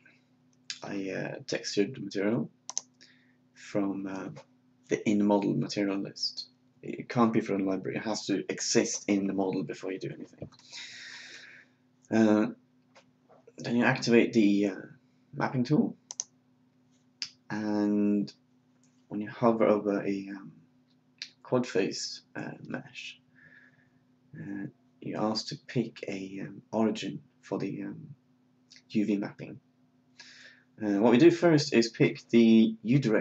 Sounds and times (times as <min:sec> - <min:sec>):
Speech: 0:00.7 - 0:02.5, 0:03.6 - 0:10.4, 0:12.1 - 0:12.6, 0:13.6 - 0:16.0, 0:17.2 - 0:18.3, 0:19.1 - 0:20.5, 0:21.2 - 0:23.2, 0:24.4 - 0:28.2, 0:28.8 - 0:29.6, 0:30.8 - 0:33.2.